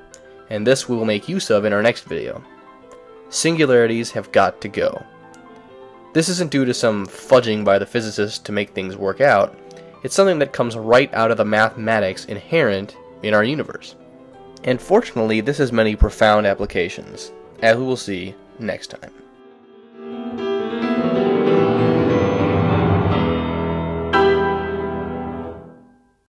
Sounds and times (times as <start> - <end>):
Piano: 0.0 - 26.3
Speech: 0.5 - 2.5, 3.3 - 5.1, 6.2 - 14.0, 14.6 - 19.2.